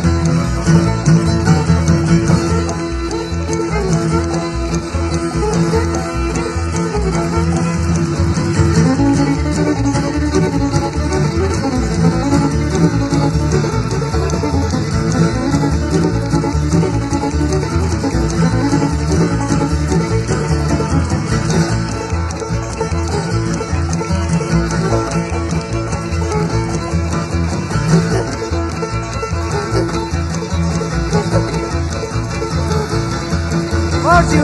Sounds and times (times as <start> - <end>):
Music: 0.0 - 34.4.